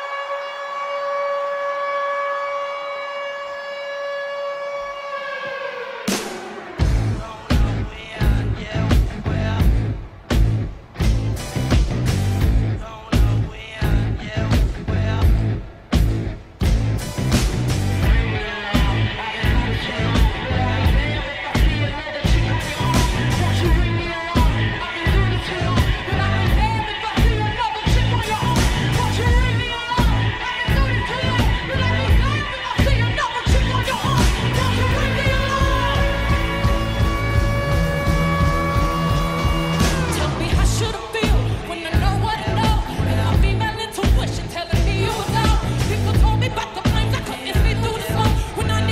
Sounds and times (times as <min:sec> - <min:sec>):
Music: 0:00.0 - 0:48.9.